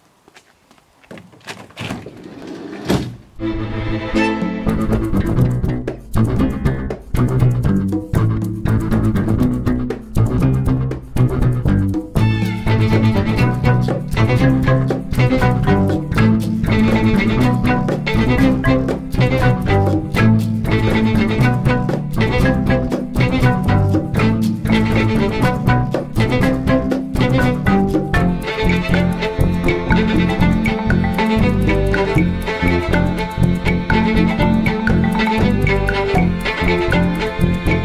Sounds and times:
Percussion: 0:04.1 - 0:37.8.

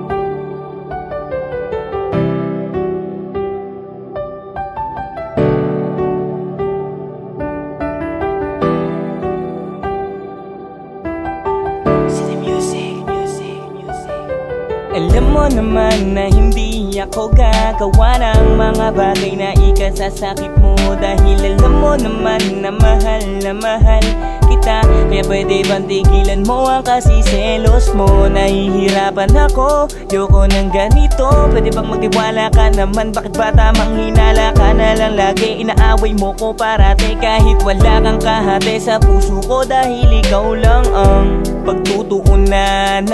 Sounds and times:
Soul music: 0:00.0 - 0:43.1.

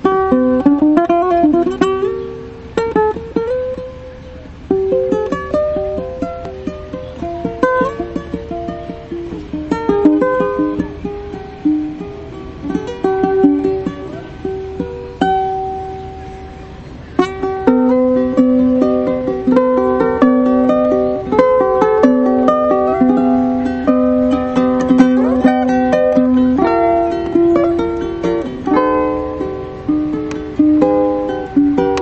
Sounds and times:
Acoustic guitar: 0:00.0 - 0:32.0
Strum: 0:00.0 - 0:32.0.

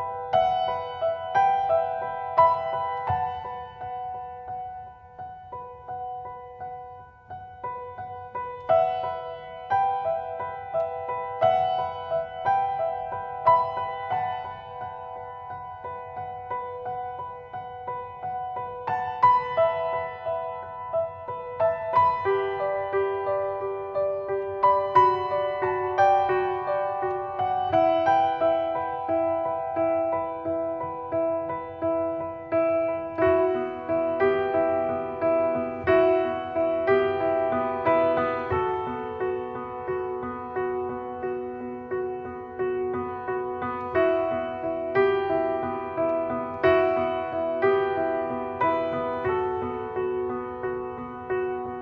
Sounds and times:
Music: 0:00.0 - 0:51.8.

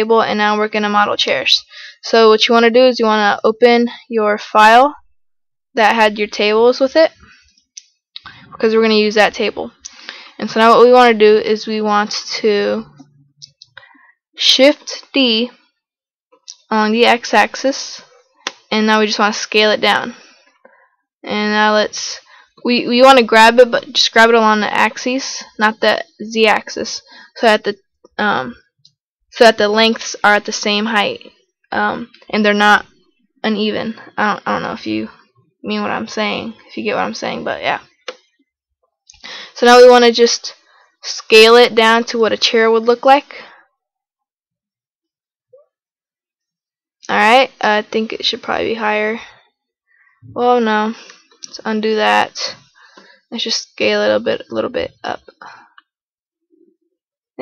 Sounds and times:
Speech: 0:00.0 - 0:05.0, 0:05.8 - 0:07.2, 0:08.2 - 0:09.8, 0:10.4 - 0:13.6, 0:14.4 - 0:15.5, 0:16.5 - 0:18.0, 0:18.7 - 0:20.2, 0:21.3 - 0:28.6, 0:29.4 - 0:32.9, 0:33.5 - 0:37.9, 0:39.6 - 0:43.5, 0:47.1 - 0:49.2, 0:50.3 - 0:52.6, 0:53.3 - 0:55.6.

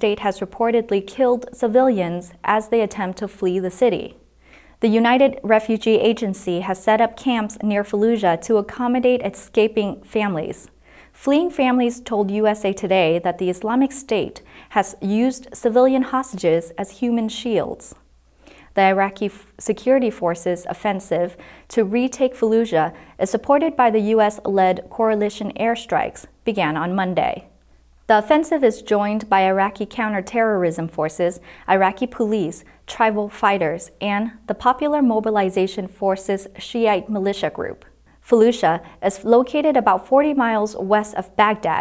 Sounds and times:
Speech: 0:00.0 - 0:04.2, 0:04.8 - 0:18.0, 0:18.8 - 0:41.8.

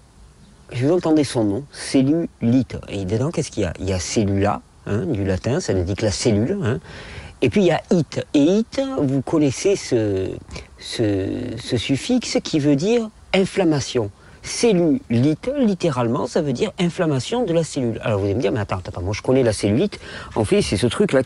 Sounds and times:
Speech: 0:00.7 - 0:06.8, 0:07.4 - 0:21.2.

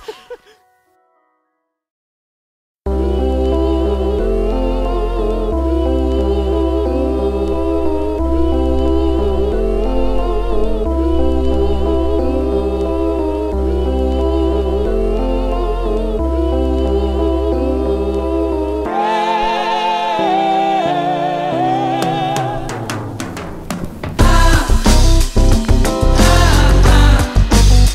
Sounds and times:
Music: 0:00.0 - 0:01.9, 0:02.9 - 0:27.9
Humming: 0:02.9 - 0:27.9.

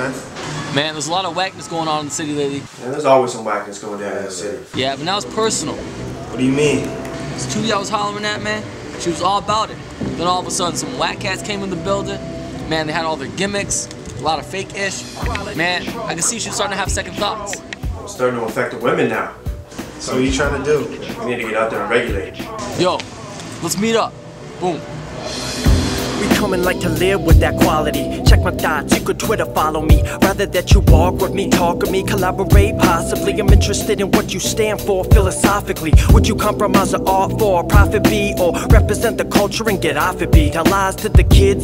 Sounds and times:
Speech: 0:06.4 - 0:19.4, 0:20.0 - 0:23.0
Pop music: 0:10.0 - 0:24.1, 0:25.2 - 0:41.6.

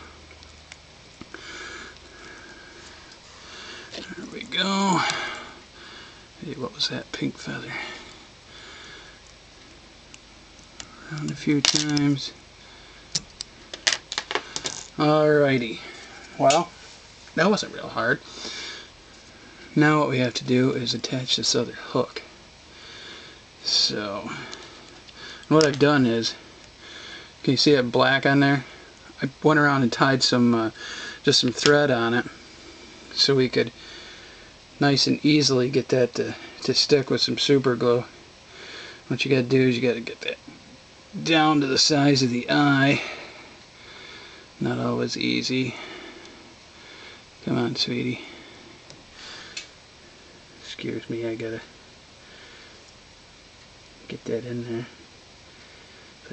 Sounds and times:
Speech: 0:04.0 - 0:05.3, 0:06.4 - 0:07.9, 0:11.0 - 0:12.4, 0:15.0 - 0:16.8, 0:17.4 - 0:18.2, 0:19.8 - 0:22.3, 0:23.6 - 0:24.5, 0:25.5 - 0:26.4, 0:27.4 - 0:32.3, 0:33.2 - 0:33.8, 0:34.8 - 0:38.1, 0:39.1 - 0:40.4, 0:41.2 - 0:43.1, 0:44.6 - 0:45.8, 0:47.4 - 0:48.3, 0:50.6 - 0:51.7, 0:54.0 - 0:55.0.

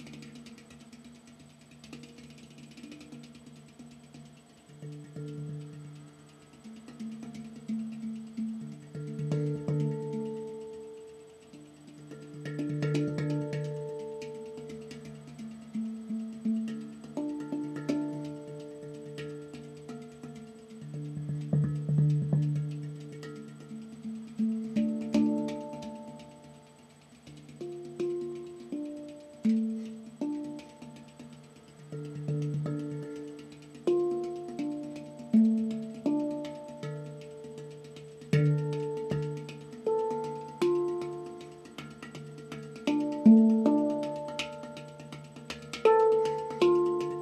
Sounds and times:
Music: 0:00.0 - 0:47.2.

